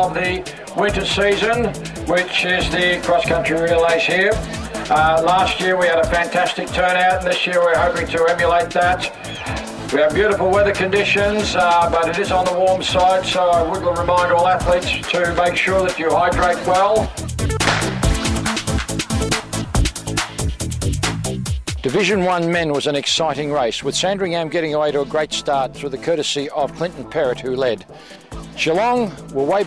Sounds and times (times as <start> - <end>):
Male speech, man speaking: 0.0 - 9.2, 9.9 - 17.1, 21.8 - 27.8, 28.6 - 29.6
Music: 0.0 - 29.6.